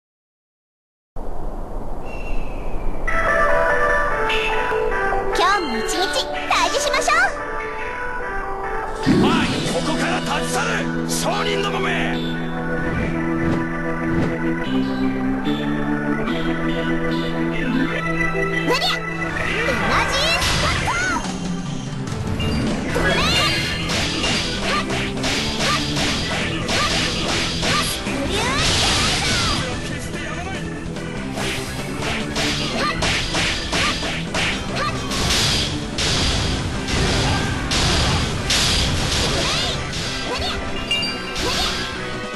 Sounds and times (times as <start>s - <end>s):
Music: 3.1s - 42.3s.